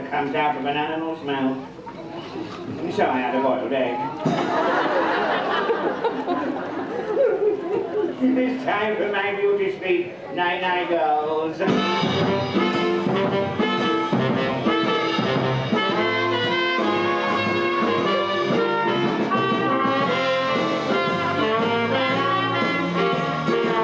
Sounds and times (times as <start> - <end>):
Speech: 0.0 - 4.3, 8.2 - 12.2
Music: 11.6 - 23.8.